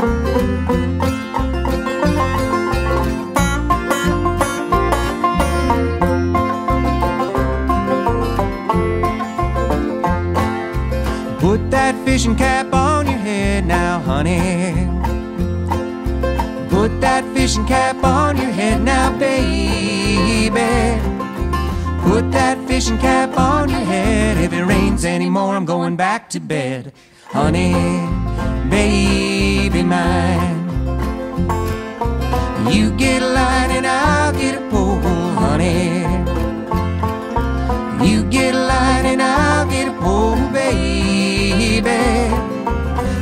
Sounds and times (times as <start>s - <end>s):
Folk music: 0.0s - 43.2s.